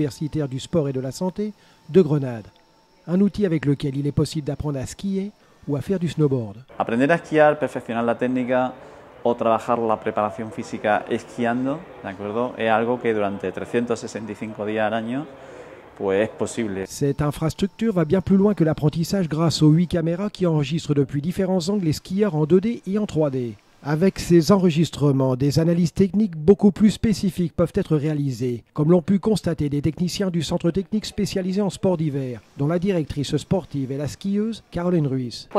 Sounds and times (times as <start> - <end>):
Speech: 0.0 - 15.4, 16.0 - 35.5.